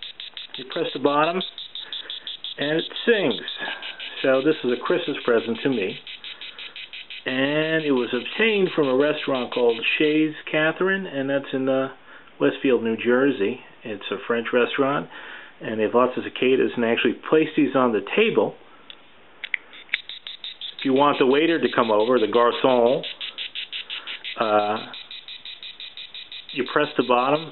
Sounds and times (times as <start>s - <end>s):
Speech: 0.6s - 1.5s, 2.6s - 3.5s, 4.2s - 6.0s, 7.3s - 18.6s, 20.8s - 23.1s, 24.4s - 24.9s, 26.6s - 27.5s.